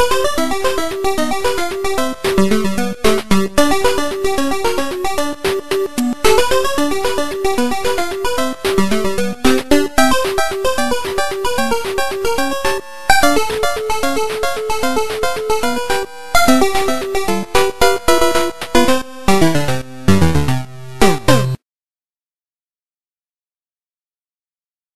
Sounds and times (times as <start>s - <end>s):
Soundtrack music: 0.0s - 21.6s.